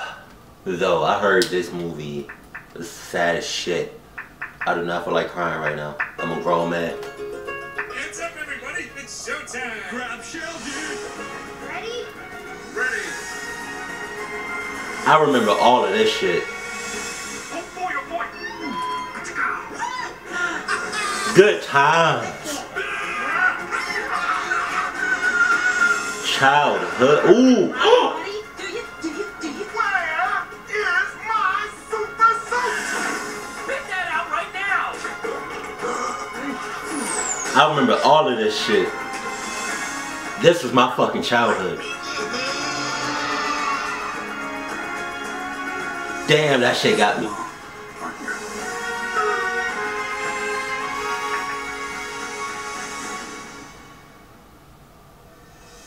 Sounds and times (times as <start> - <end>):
Music: 4.2 - 54.6, 55.2 - 55.8.